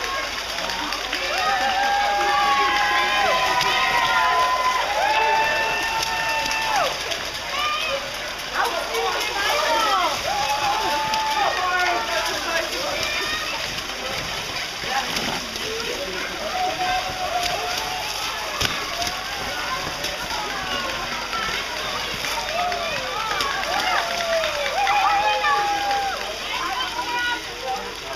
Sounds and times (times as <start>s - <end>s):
Speech: 0.0s - 28.1s.